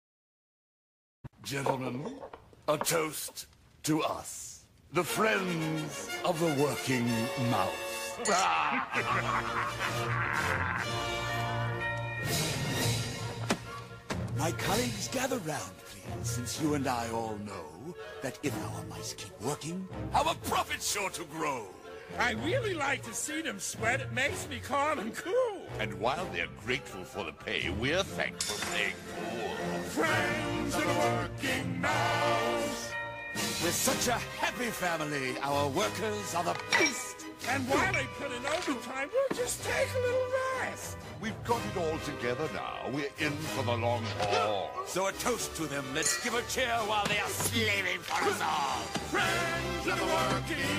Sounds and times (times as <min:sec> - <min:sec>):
Speech: 0:01.4 - 0:08.8, 0:14.4 - 0:29.0, 0:33.7 - 0:50.6
Music: 0:04.9 - 0:50.7.